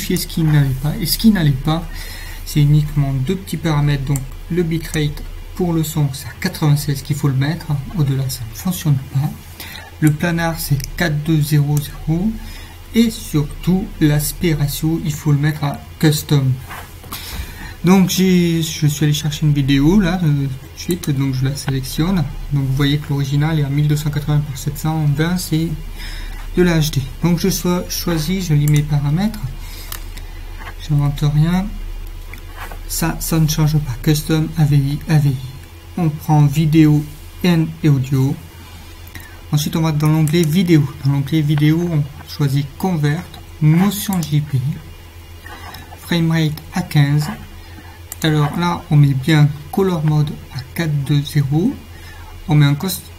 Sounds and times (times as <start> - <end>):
Speech: 0.0 - 16.9, 17.8 - 29.6, 30.6 - 31.9, 32.6 - 38.5, 39.5 - 44.9, 45.6 - 47.5, 48.1 - 53.1.